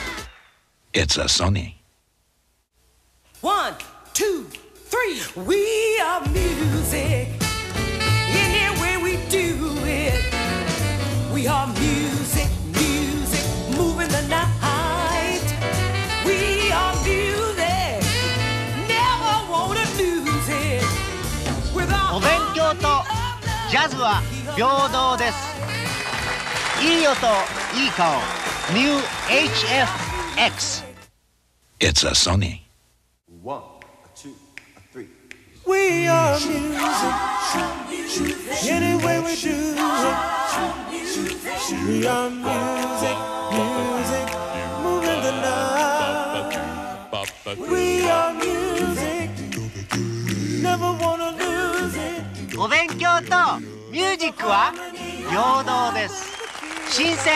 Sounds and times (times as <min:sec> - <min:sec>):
Music: 0:00.0 - 0:00.4, 0:03.4 - 0:31.1, 0:35.8 - 0:57.3.